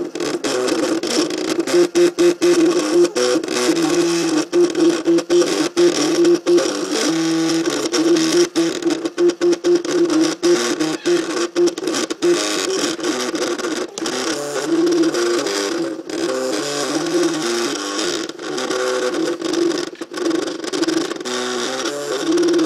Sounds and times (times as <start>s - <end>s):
Printer: 0.0s - 22.6s.